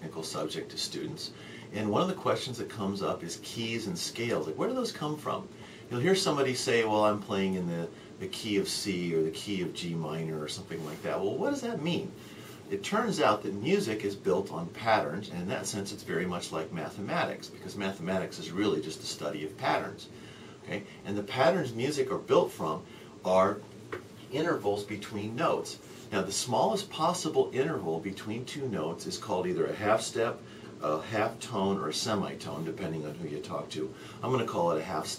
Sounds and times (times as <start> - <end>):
Speech: 0.0 - 23.7, 24.3 - 35.1.